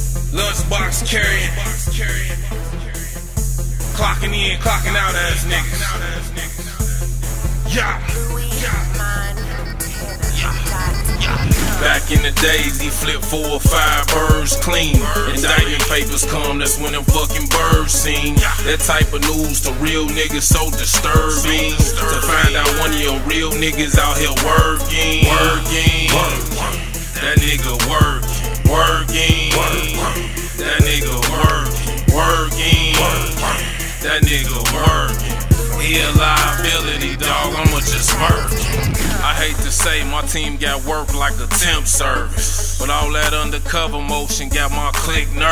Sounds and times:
Independent music: 0.0 - 45.5.

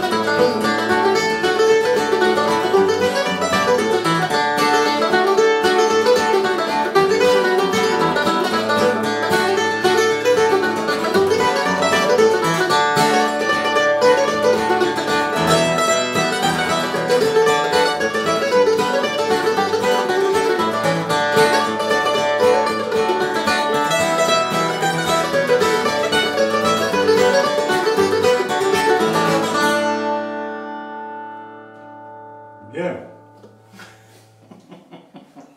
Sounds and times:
Mandolin: 0.0 - 34.8
Guitar: 0.0 - 35.5
Speech: 32.6 - 33.2.

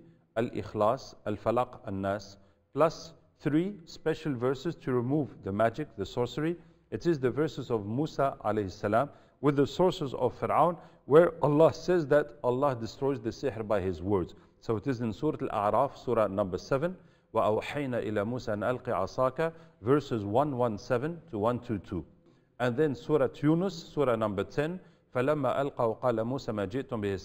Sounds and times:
Speech: 0.4 - 27.2.

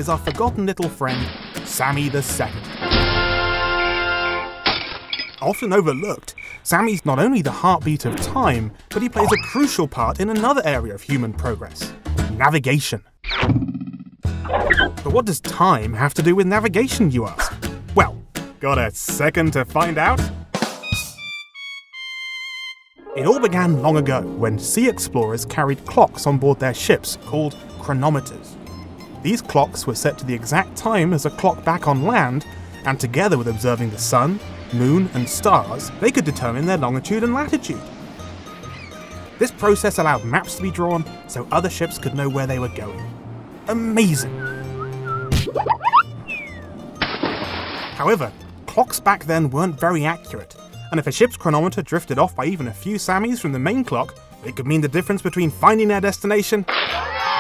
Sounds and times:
Speech: 0.0 - 2.7, 5.4 - 13.1, 15.0 - 20.3, 23.2 - 28.5, 29.2 - 37.8, 39.4 - 43.1, 43.7 - 44.4, 48.0 - 56.7
Music: 0.0 - 4.7, 6.8 - 12.6, 14.2 - 57.4.

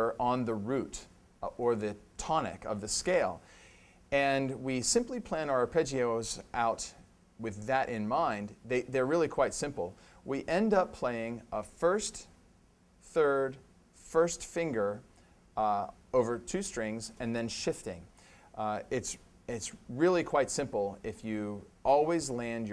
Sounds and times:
Speech: 0.0 - 3.4, 4.1 - 12.4, 13.0 - 22.7.

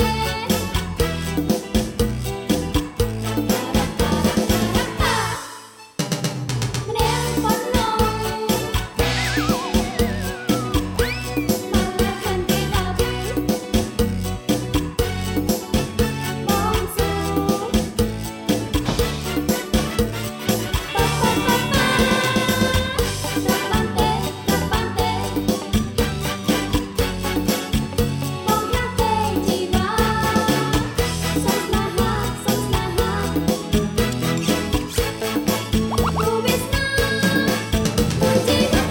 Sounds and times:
Music: 0.0 - 38.9
Singing: 20.8 - 25.3, 38.2 - 38.9.

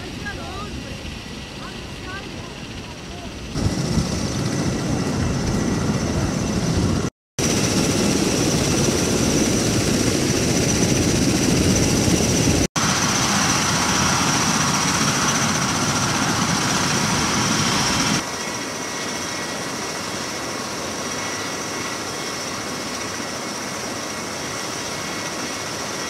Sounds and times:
Helicopter: 0.0 - 26.1
Outside, rural or natural: 0.0 - 26.1.

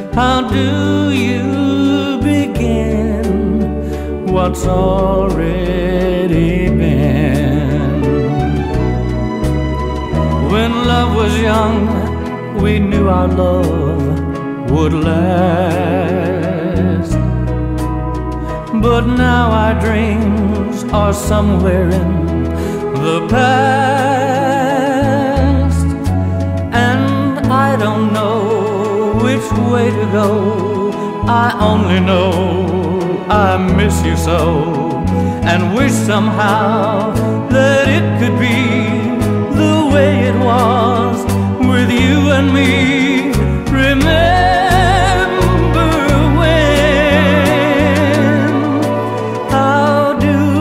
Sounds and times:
Tender music: 0.0 - 50.6.

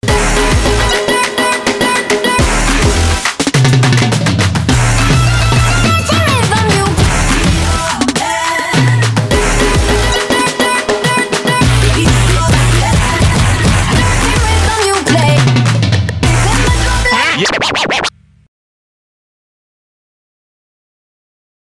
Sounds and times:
Drum: 0.0 - 18.2
Drum kit: 0.0 - 18.2.

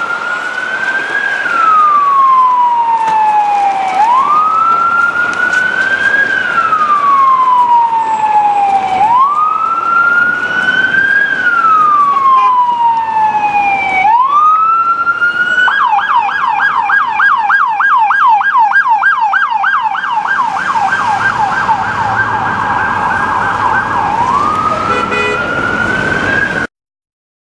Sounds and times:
Ambulance (siren): 0.0 - 26.7.

